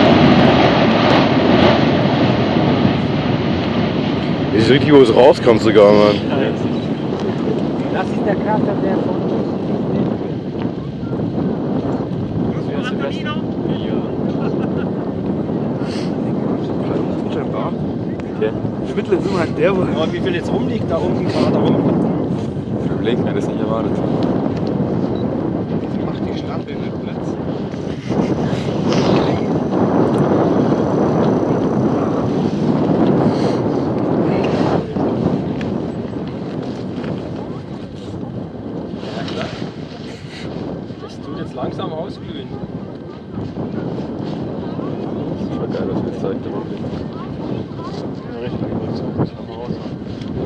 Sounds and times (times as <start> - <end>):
Eruption: 0.0 - 50.4.